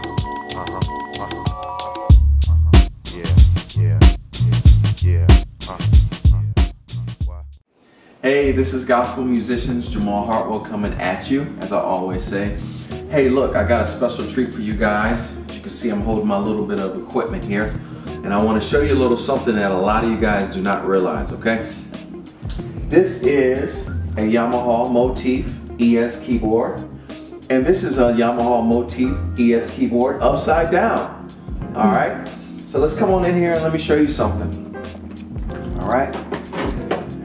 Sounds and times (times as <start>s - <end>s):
Music: 0.0s - 7.6s, 8.4s - 37.2s
Speech: 0.5s - 1.5s, 5.0s - 6.5s, 8.2s - 21.8s, 22.9s - 26.8s, 27.5s - 34.6s, 35.7s - 36.2s.